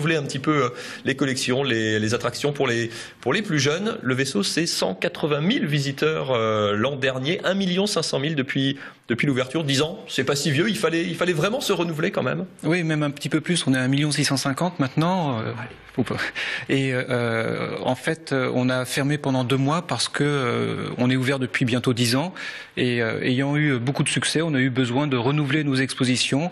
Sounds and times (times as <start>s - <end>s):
Speech: 0.0s - 26.5s.